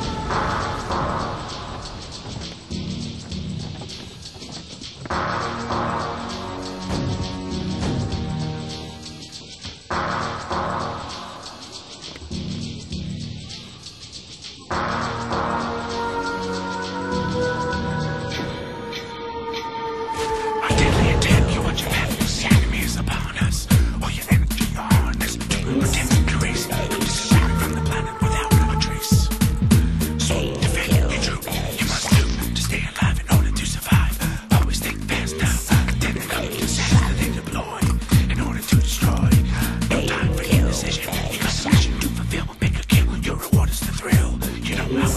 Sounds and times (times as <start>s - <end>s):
Music: 0.0s - 45.1s
Speech: 20.6s - 29.3s, 30.2s - 34.0s, 34.6s - 45.1s.